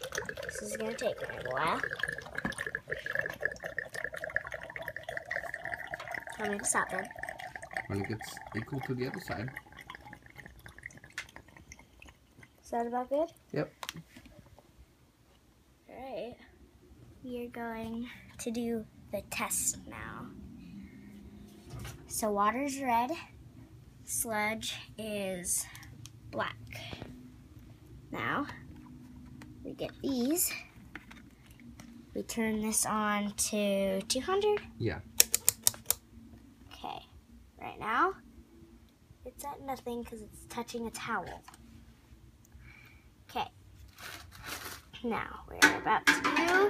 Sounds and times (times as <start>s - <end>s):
Inside, small room: 0.0s - 46.6s.